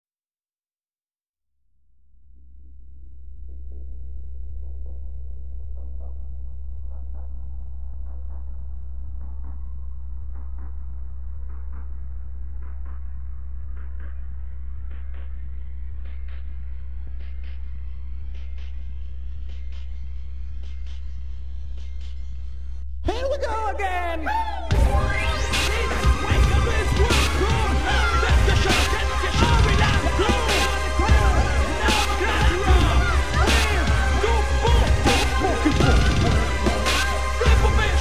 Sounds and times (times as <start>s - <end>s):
Music: 3.4s - 38.0s.